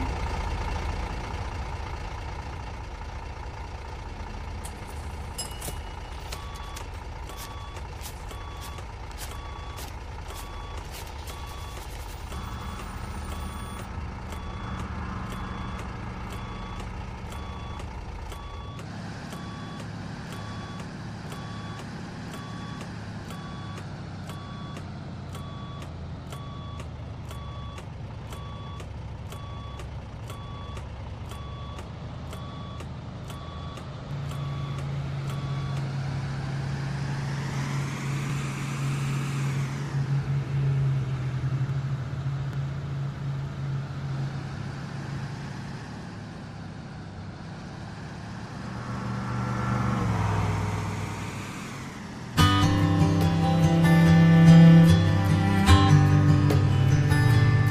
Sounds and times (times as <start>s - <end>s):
Truck: 0.0s - 57.7s.